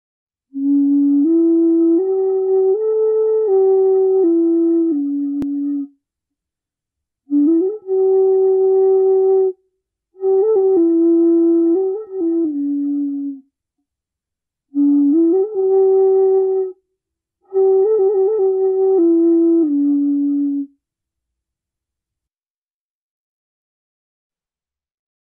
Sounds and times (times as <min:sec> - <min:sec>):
Flute: 0:00.5 - 0:06.0, 0:07.3 - 0:13.5, 0:14.7 - 0:20.8.